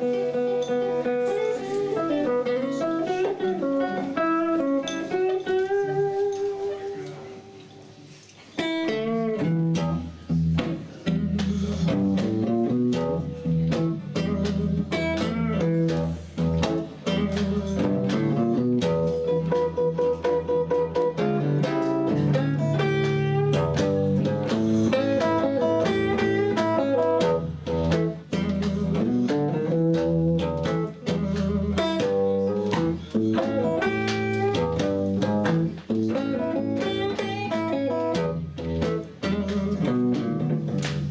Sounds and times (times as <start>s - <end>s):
Blues: 0.0s - 41.1s
Jazz: 0.0s - 41.1s
Steel guitar, slide guitar: 0.0s - 41.1s.